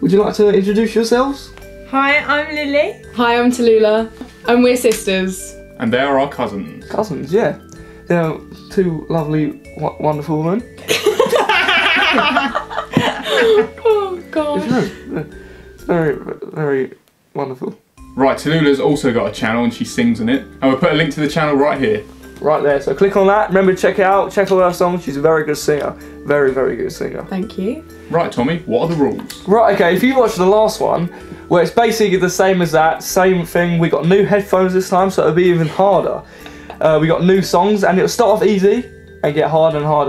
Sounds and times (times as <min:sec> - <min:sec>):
Music: 0:00.0 - 0:40.0.